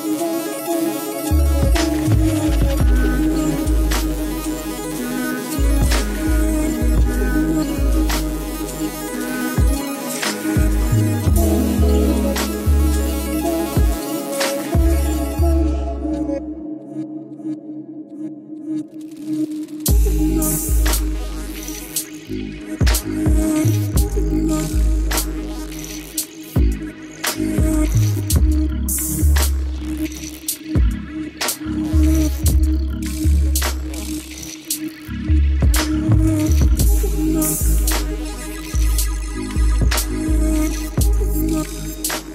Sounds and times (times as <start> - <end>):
Electronica: 0.0 - 42.3.